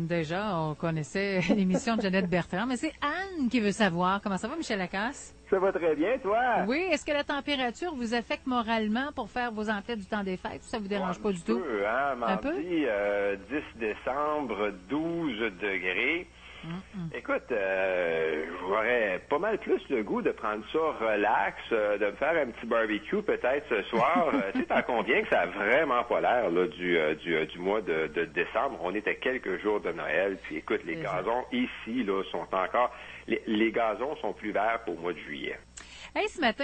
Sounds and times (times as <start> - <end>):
Speech: 0.0 - 4.7, 5.6 - 35.6.